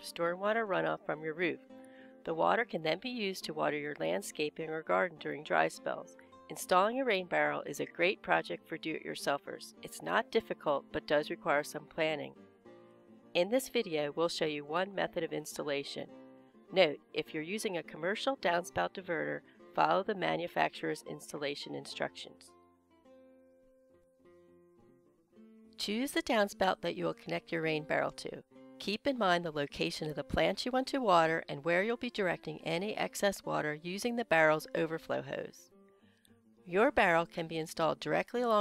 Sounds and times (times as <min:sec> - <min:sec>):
Speech: 0:00.0 - 0:01.6, 0:02.3 - 0:12.3, 0:13.4 - 0:16.1, 0:16.7 - 0:22.5, 0:25.8 - 0:35.6, 0:36.7 - 0:38.6.